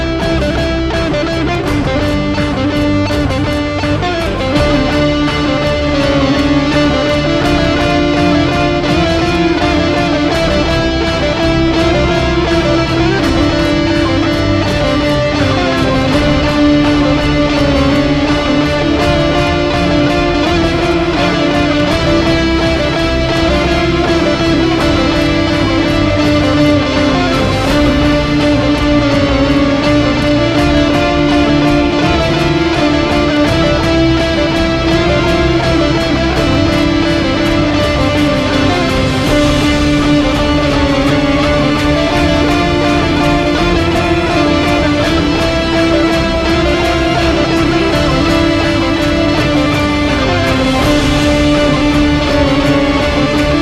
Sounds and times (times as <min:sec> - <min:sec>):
Electric guitar: 0:00.0 - 0:53.6
Strum: 0:00.0 - 0:53.6.